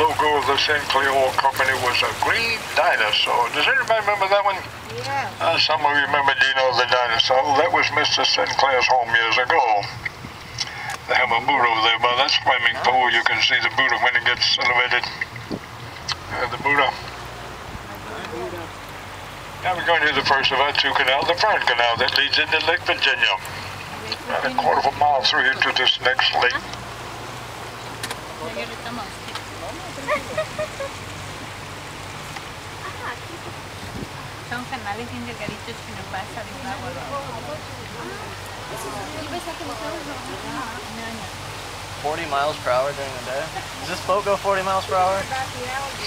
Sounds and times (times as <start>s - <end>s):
Speech: 0.0s - 10.0s, 11.1s - 15.2s, 16.3s - 17.0s, 19.6s - 26.6s, 42.0s - 46.0s
Sailboat, sailing ship: 0.0s - 46.0s.